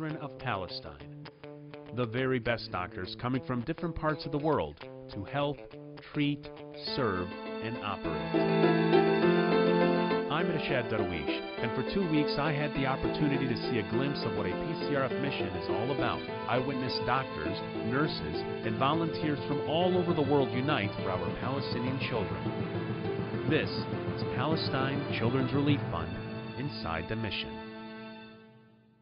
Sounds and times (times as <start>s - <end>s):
Speech: 0.0s - 1.0s, 2.0s - 8.3s, 10.3s - 22.4s, 23.5s - 27.6s
Music: 0.0s - 29.0s.